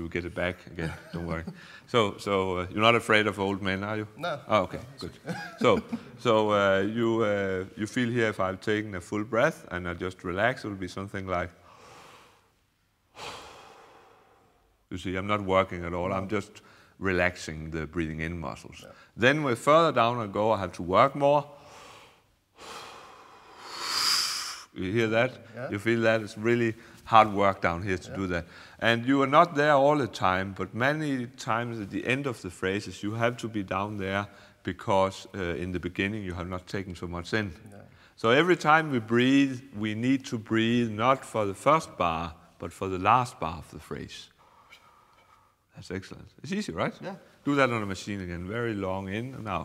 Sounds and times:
Speech: 0.0s - 11.6s, 14.9s - 21.5s, 24.8s - 44.3s, 45.7s - 49.6s.

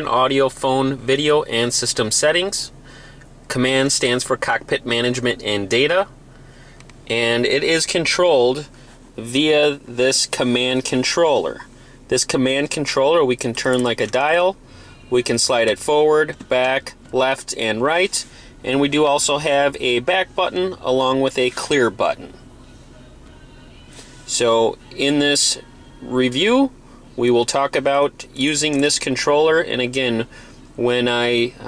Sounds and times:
Speech: 0.0s - 2.7s, 3.5s - 6.1s, 7.1s - 22.4s, 24.3s - 31.6s
Music: 13.6s - 31.6s.

